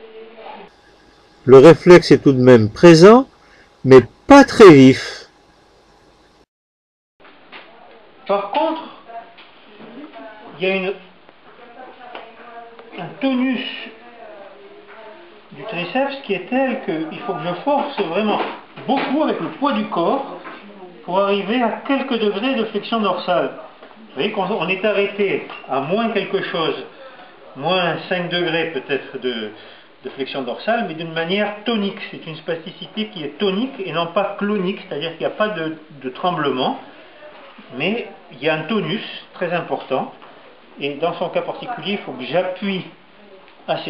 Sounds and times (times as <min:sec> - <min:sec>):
Speech: 0:01.5 - 0:03.3, 0:03.9 - 0:05.3, 0:07.8 - 0:40.2, 0:40.8 - 0:43.9.